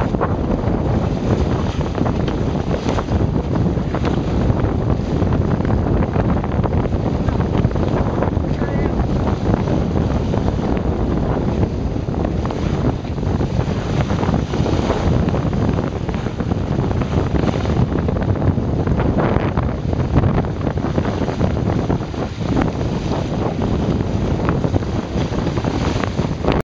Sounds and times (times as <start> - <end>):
Sailboat, sailing ship: 0.0 - 26.6
Wind noise (microphone): 0.0 - 26.6.